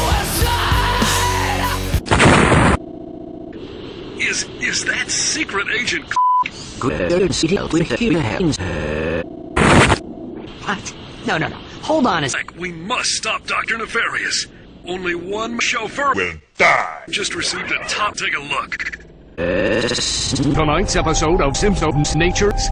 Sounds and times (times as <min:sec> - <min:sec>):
Speech: 0:10.6 - 0:18.8, 0:19.8 - 0:22.7.